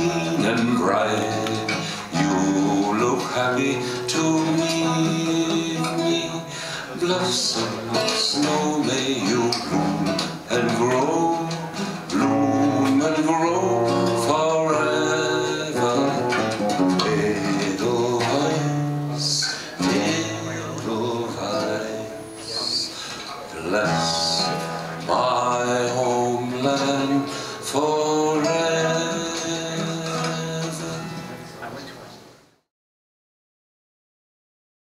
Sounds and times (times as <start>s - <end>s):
Music: 0.0s - 32.1s.